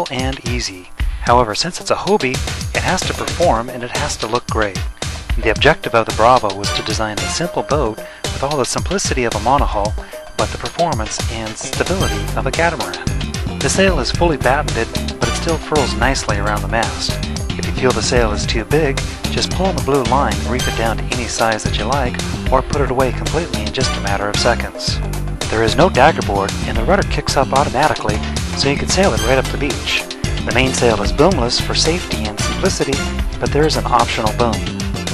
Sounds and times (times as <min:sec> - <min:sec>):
Music: 0:00.0 - 0:35.1
Speech: 0:00.0 - 0:35.1.